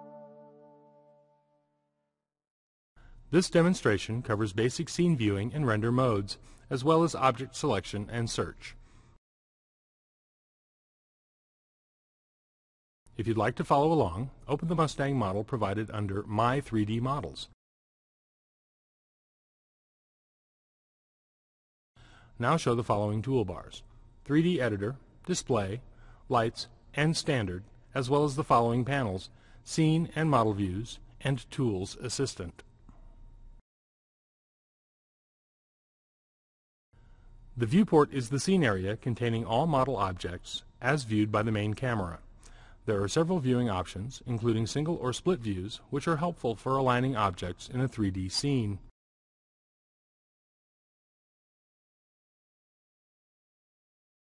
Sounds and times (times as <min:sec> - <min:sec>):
Speech: 0:03.3 - 0:08.8, 0:13.1 - 0:17.6, 0:22.4 - 0:32.7, 0:37.6 - 0:42.3, 0:42.9 - 0:48.9.